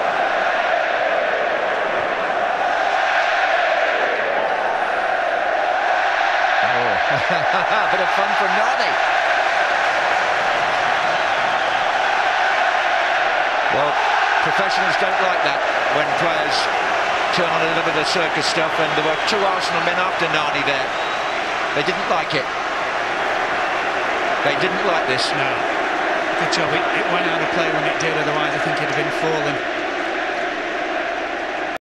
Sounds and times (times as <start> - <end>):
Speech: 6.6 - 9.0, 13.8 - 16.7, 17.3 - 20.9, 21.8 - 22.5, 24.4 - 25.7, 26.4 - 29.6.